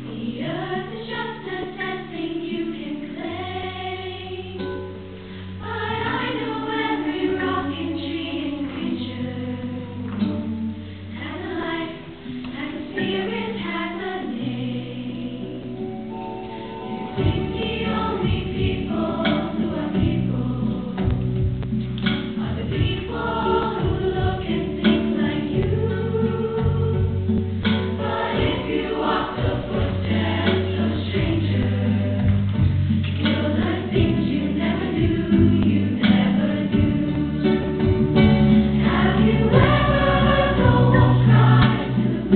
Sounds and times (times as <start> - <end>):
Choir: 0.0 - 4.8, 5.6 - 16.0, 16.9 - 21.3, 22.3 - 42.3.